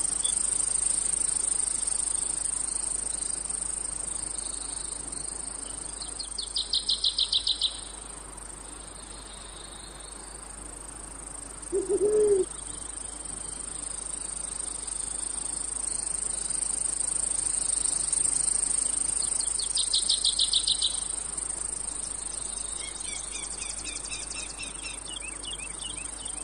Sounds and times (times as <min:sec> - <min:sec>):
Cricket: 0:00.0 - 0:26.4.